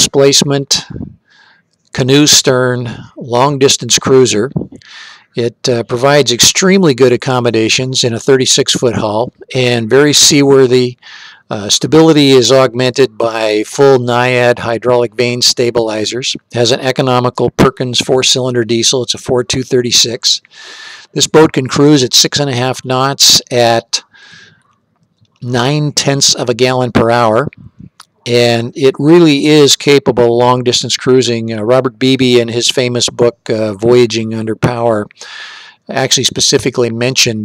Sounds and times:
Speech: 0:00.0 - 0:01.2, 0:01.9 - 0:20.5, 0:21.1 - 0:24.4, 0:25.4 - 0:35.3, 0:35.9 - 0:37.4.

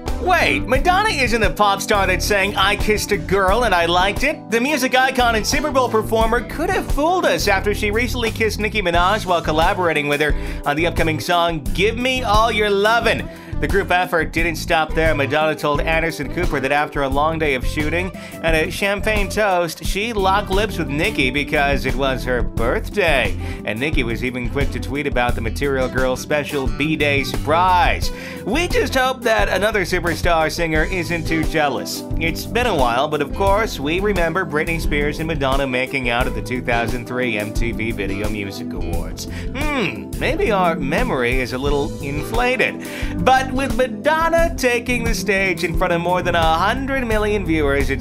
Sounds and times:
Music: 0:00.0 - 0:48.0
Speech: 0:00.2 - 0:48.0.

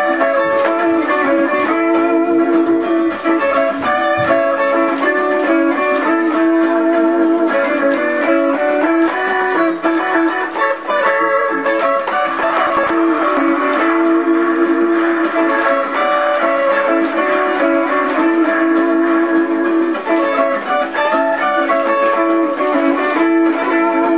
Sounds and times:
Guitar: 0:00.0 - 0:24.1.

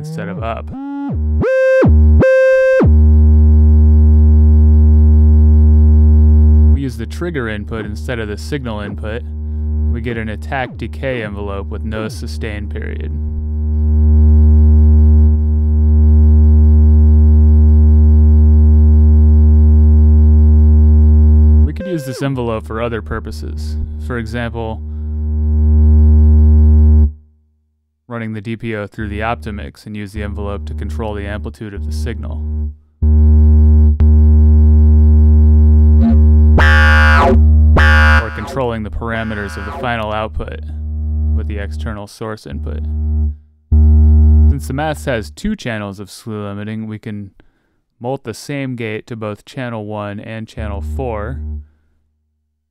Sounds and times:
Speech: 0:00.0 - 0:00.8, 0:06.8 - 0:09.3, 0:09.9 - 0:13.3, 0:21.7 - 0:24.8, 0:28.1 - 0:32.4, 0:36.6 - 0:40.8, 0:41.4 - 0:42.9, 0:44.5 - 0:47.4, 0:48.0 - 0:51.4
Synthesizer: 0:21.8 - 0:22.3, 0:36.0 - 0:40.0.

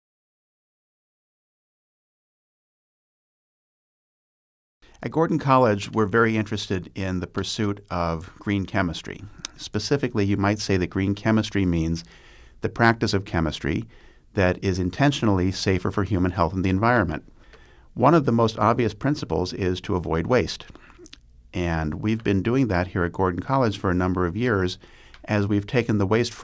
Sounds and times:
Inside, small room: 0:04.8 - 0:26.4
Speech: 0:05.0 - 0:17.3, 0:18.0 - 0:26.4.

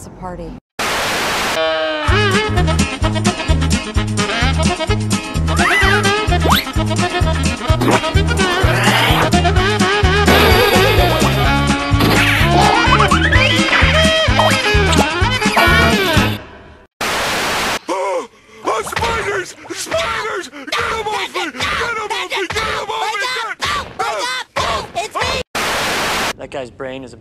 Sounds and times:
Music: 0:01.6 - 0:16.5.

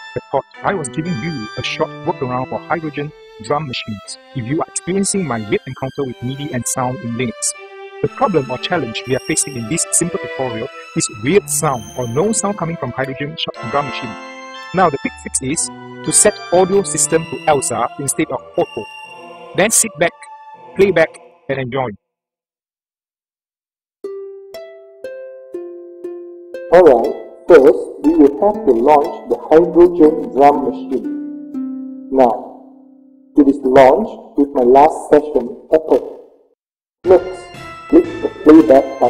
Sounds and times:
Music: 0:00.0 - 0:22.1, 0:24.0 - 0:35.7, 0:37.0 - 0:39.0
Speech: 0:00.2 - 0:14.2, 0:14.8 - 0:18.9, 0:19.6 - 0:22.0, 0:26.7 - 0:31.1, 0:32.1 - 0:32.6, 0:33.4 - 0:36.2, 0:37.1 - 0:39.0.

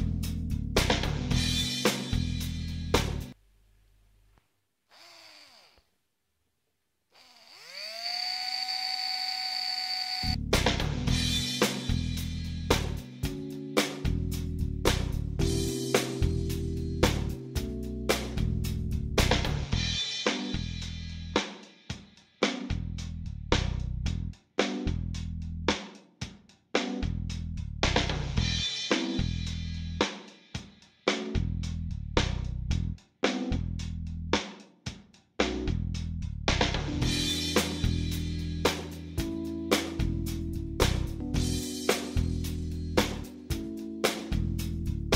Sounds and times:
Music: 0:00.0 - 0:03.4, 0:10.3 - 0:45.1.

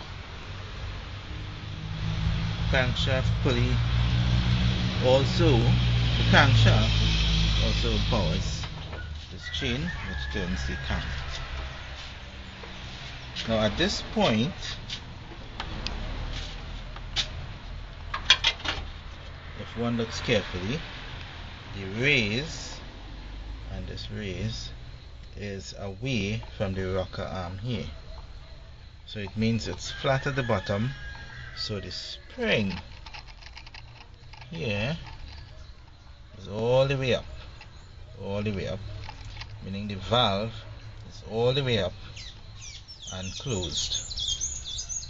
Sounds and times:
Speech: 0:02.7 - 0:03.8, 0:05.0 - 0:08.7, 0:09.3 - 0:11.4, 0:13.4 - 0:14.8, 0:19.6 - 0:20.9, 0:21.7 - 0:22.9, 0:23.7 - 0:24.8, 0:25.4 - 0:28.0, 0:29.1 - 0:31.0, 0:31.6 - 0:32.8, 0:34.5 - 0:35.0, 0:36.4 - 0:37.3, 0:38.2 - 0:38.9, 0:39.6 - 0:42.0, 0:43.1 - 0:44.0.

